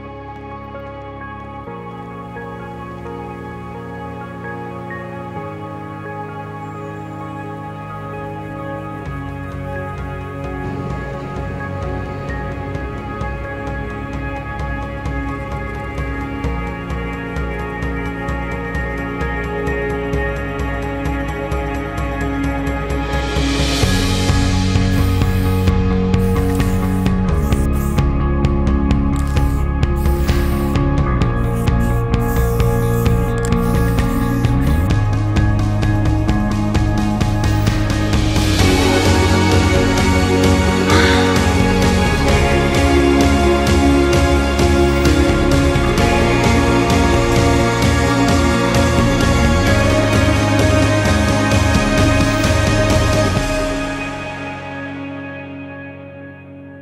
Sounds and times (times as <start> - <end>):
Music: 0.0 - 56.8
Spray: 24.9 - 28.0, 29.2 - 30.8, 31.4 - 34.9.